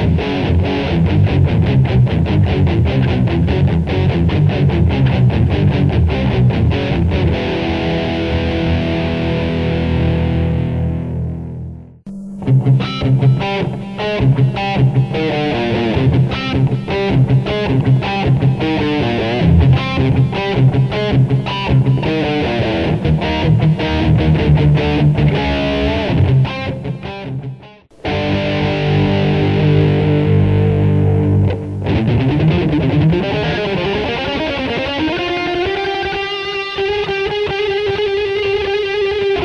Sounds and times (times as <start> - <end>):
Strum: 0.0 - 35.1
Electric guitar: 0.0 - 39.4.